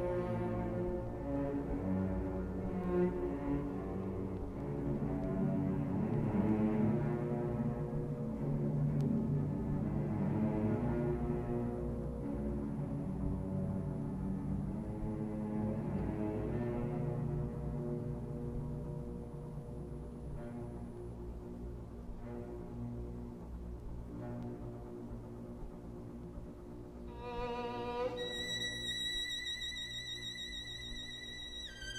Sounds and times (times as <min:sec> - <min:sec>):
Violin, fiddle: 0:00.0 - 0:31.9.